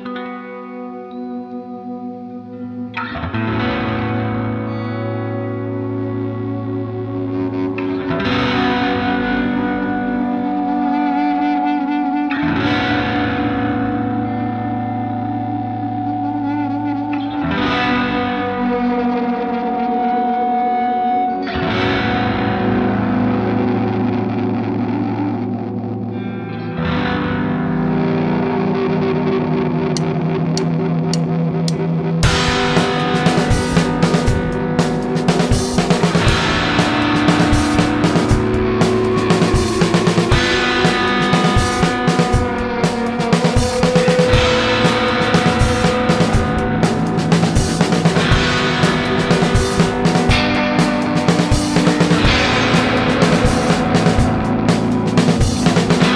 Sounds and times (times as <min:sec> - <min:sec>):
Music: 0:00.0 - 0:56.1.